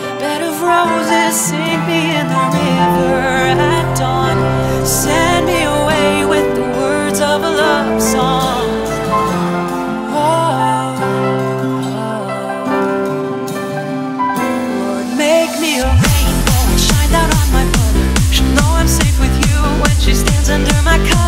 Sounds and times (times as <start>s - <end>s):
Music: 0.0s - 21.2s.